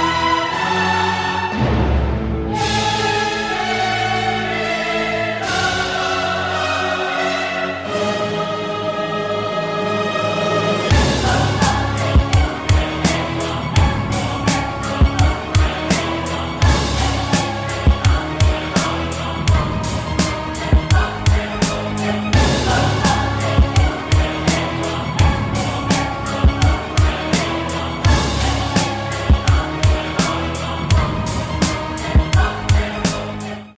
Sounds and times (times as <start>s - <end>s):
Music: 0.0s - 33.7s.